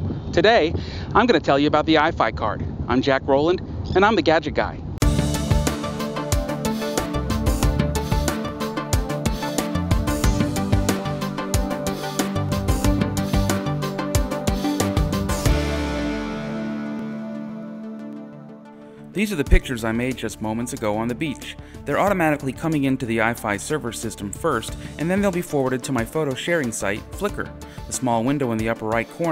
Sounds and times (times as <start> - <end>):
Speech: 0.4 - 4.8, 19.2 - 29.3
Music: 5.0 - 29.3.